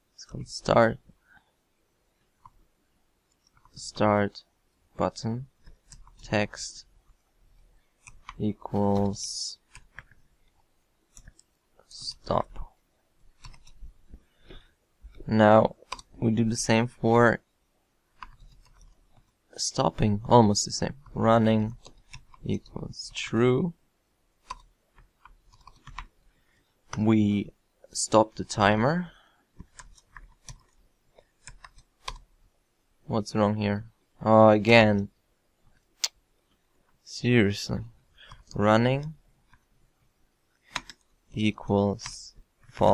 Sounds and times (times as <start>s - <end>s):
Inside, small room: 0.0s - 42.9s
Speech: 0.2s - 1.0s, 3.8s - 5.5s, 6.2s - 6.8s, 8.4s - 9.6s, 11.9s - 12.7s, 15.2s - 17.4s, 19.6s - 21.8s, 22.4s - 23.8s, 27.0s - 29.1s, 33.1s - 35.1s, 37.0s - 37.9s, 38.5s - 39.2s, 41.3s - 42.9s.